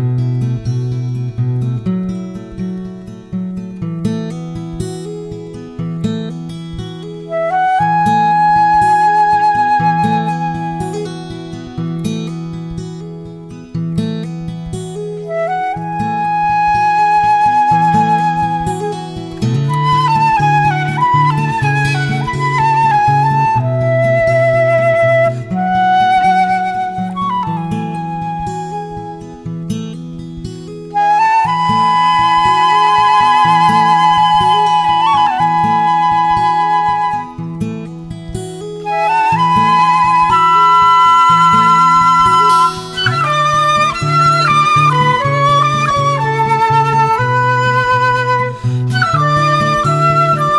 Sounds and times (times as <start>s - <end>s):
Music: 0.0s - 50.5s.